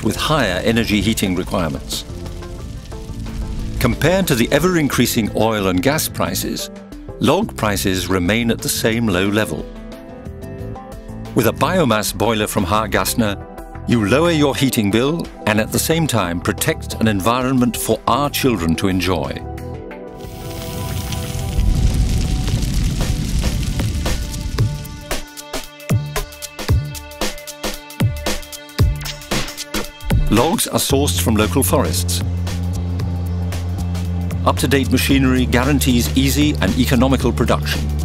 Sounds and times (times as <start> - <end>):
Speech: 0.0 - 2.1, 3.8 - 9.7, 11.4 - 19.5, 30.2 - 32.3, 34.4 - 37.8
Music: 0.0 - 38.0.